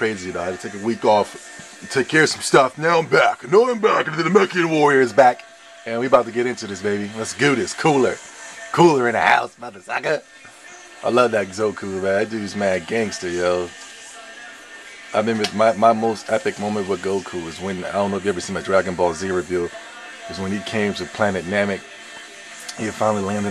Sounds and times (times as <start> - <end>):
Speech: 0.0 - 10.2, 11.0 - 13.8, 15.2 - 21.8, 22.7 - 23.5
Music: 0.0 - 23.5.